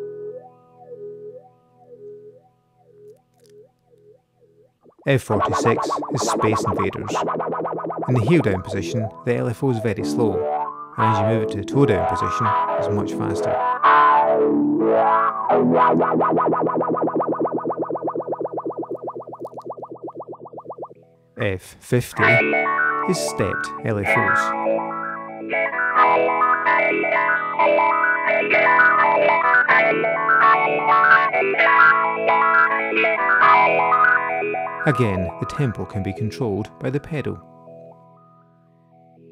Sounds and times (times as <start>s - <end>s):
Effects unit: 0.0s - 21.4s, 22.2s - 39.3s
Guitar: 0.0s - 39.3s
Speech: 5.1s - 7.3s, 8.1s - 13.6s, 21.4s - 22.5s, 23.1s - 24.5s, 34.9s - 37.4s.